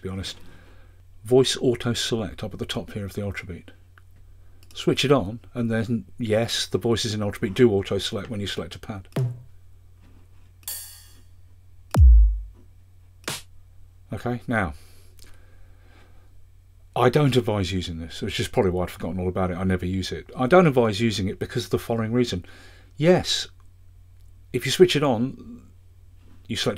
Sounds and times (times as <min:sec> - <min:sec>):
Speech: 0:00.0 - 0:00.4, 0:01.2 - 0:03.8, 0:04.7 - 0:09.1, 0:14.1 - 0:14.8, 0:17.0 - 0:23.6, 0:24.5 - 0:25.8, 0:26.5 - 0:26.7.